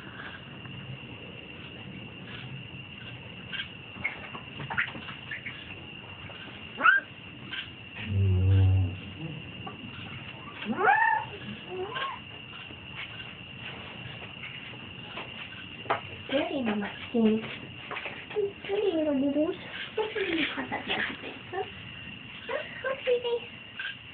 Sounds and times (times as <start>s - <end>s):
Animal: 0.0s - 0.9s, 1.6s - 24.1s.